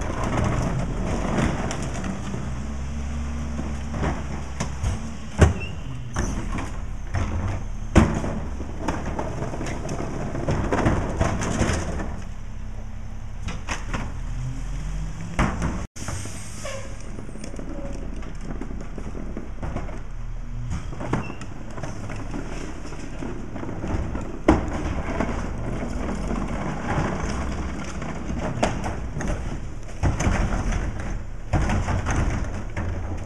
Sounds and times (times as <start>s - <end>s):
Vehicle: 0.0s - 33.2s.